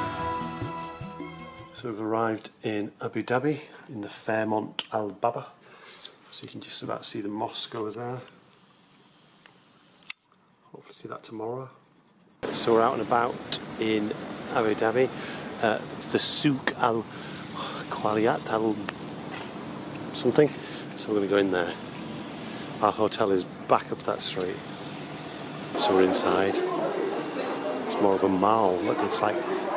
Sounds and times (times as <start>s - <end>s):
Speech: 1.8s - 5.6s, 6.3s - 8.3s, 10.7s - 11.8s, 12.4s - 17.1s, 17.8s - 18.9s, 20.2s - 21.8s, 22.8s - 24.6s, 25.8s - 29.7s
Outside, urban or manmade: 8.3s - 29.7s.